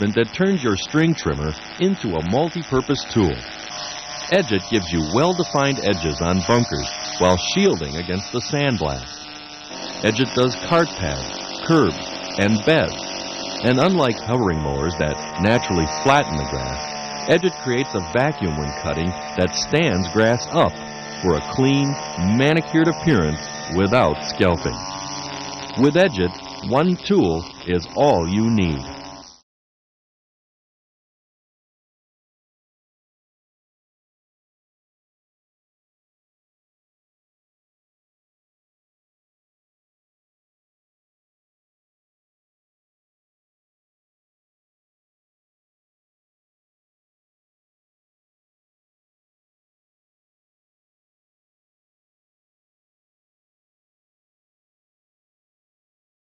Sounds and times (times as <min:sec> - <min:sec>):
Speech: 0:00.0 - 0:03.4, 0:04.3 - 0:09.1, 0:10.0 - 0:13.0, 0:13.6 - 0:24.8, 0:25.8 - 0:28.9.